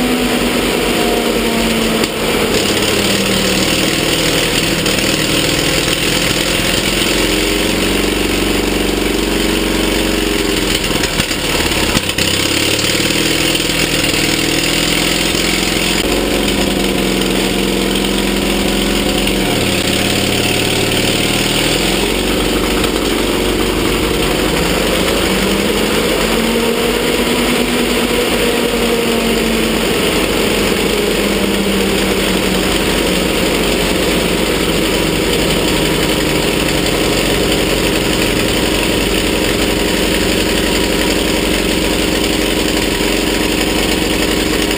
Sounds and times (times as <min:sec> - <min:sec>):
Engine: 0:00.0 - 0:44.7
Vehicle: 0:00.0 - 0:44.7.